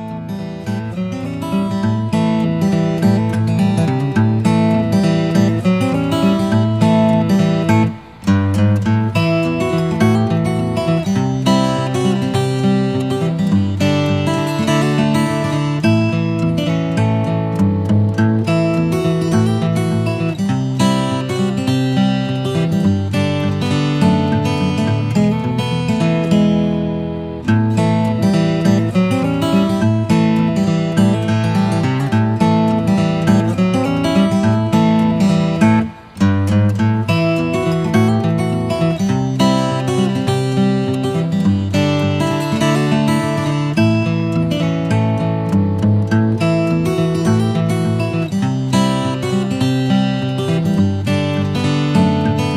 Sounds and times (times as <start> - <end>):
Music: 0.0 - 52.5.